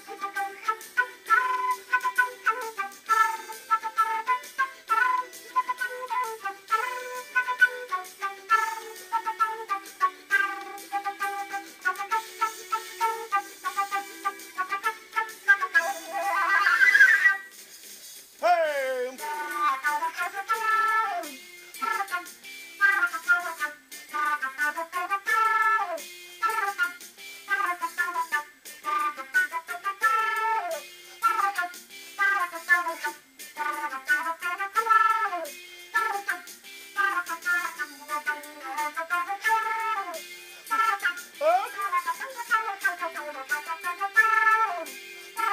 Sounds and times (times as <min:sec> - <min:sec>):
Flute: 0:00.0 - 0:17.6, 0:18.4 - 0:45.5.